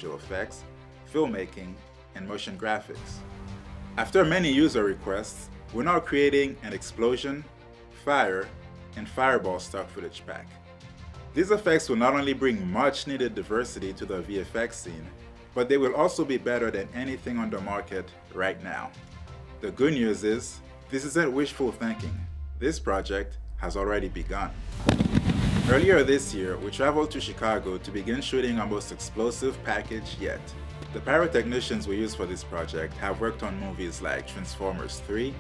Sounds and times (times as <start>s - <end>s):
Speech: 0.0s - 3.2s, 4.0s - 10.6s, 11.4s - 19.0s, 19.6s - 24.6s, 25.7s - 35.4s
Music: 0.0s - 35.4s.